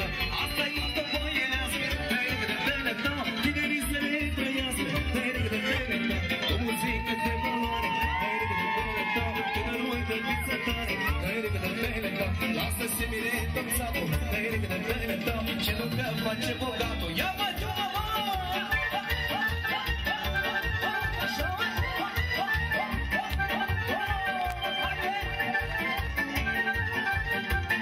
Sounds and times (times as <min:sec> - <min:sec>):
Dance music: 0:00.0 - 0:27.8
Funk: 0:00.0 - 0:27.8
Happy music: 0:00.0 - 0:27.8.